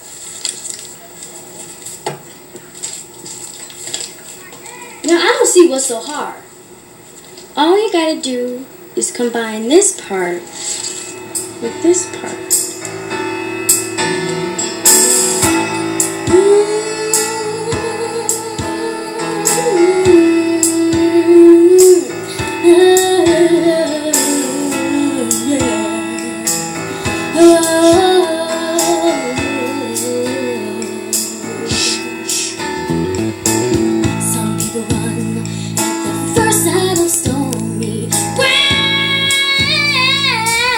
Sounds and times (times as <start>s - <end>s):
Music: 9.8s - 40.7s
Female singing: 16.3s - 26.5s, 27.2s - 32.1s, 34.2s - 35.6s, 36.3s - 40.7s.